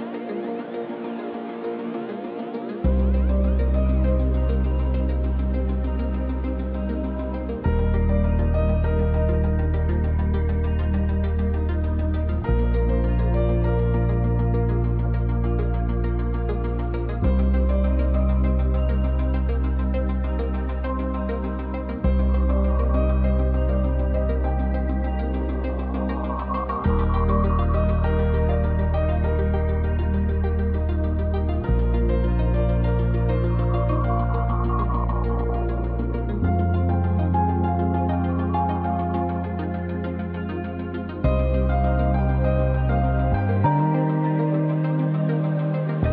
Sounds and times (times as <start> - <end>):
Music: 0.0 - 46.1.